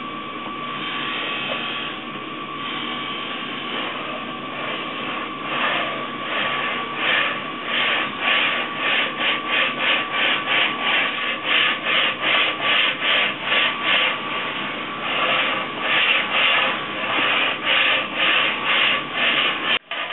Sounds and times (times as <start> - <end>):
Rub: 2.7 - 20.1.